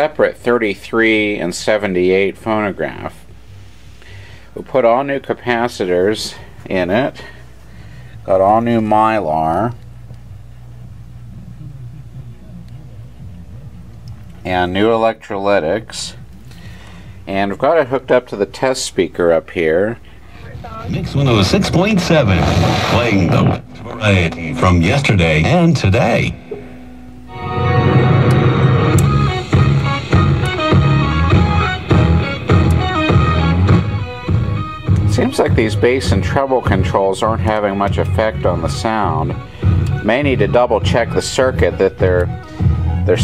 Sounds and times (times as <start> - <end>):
Speech: 0.0 - 3.2, 4.6 - 7.3, 8.3 - 9.8, 11.3 - 16.2, 17.3 - 26.4, 35.1 - 39.4, 40.0 - 42.3.